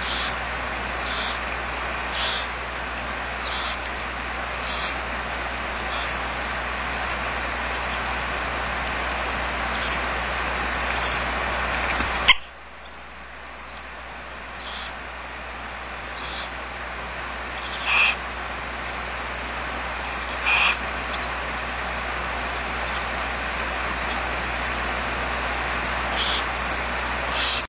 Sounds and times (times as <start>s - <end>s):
Owl: 0.0s - 0.4s, 1.0s - 2.6s, 3.4s - 3.9s, 4.6s - 5.1s, 5.7s - 8.2s, 9.6s - 10.2s, 10.8s - 11.3s, 11.9s - 15.2s, 16.0s - 16.6s, 17.4s - 19.3s, 19.9s - 21.5s, 22.7s - 24.4s, 26.0s - 26.6s, 27.2s - 27.6s.